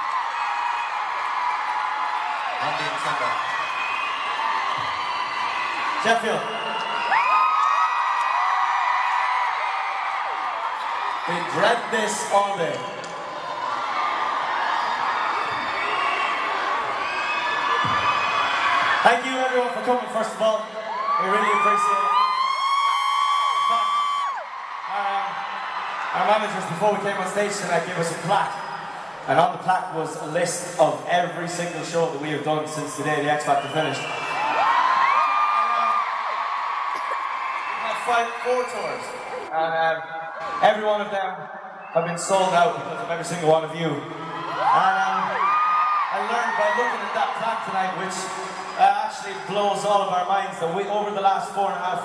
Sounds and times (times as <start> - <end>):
Male speech, man speaking: 2.6 - 3.4, 6.0 - 6.6, 11.3 - 12.9, 19.0 - 22.2, 24.9 - 25.4, 26.1 - 28.6, 29.3 - 34.1, 37.8 - 44.1, 44.7 - 45.4, 46.1 - 52.0.